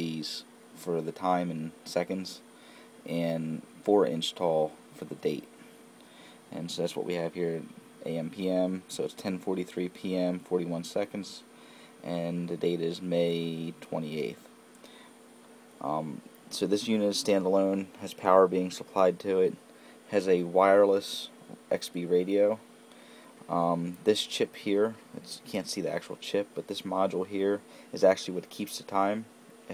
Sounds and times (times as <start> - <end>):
Speech: 0.0 - 2.4, 3.1 - 5.5, 6.5 - 14.5, 15.8 - 22.6, 23.5 - 29.7.